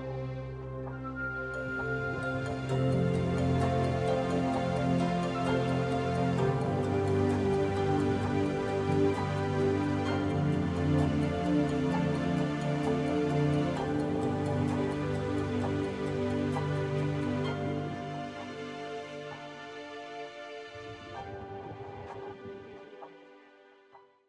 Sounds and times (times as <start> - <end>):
Music: 0.0 - 24.2.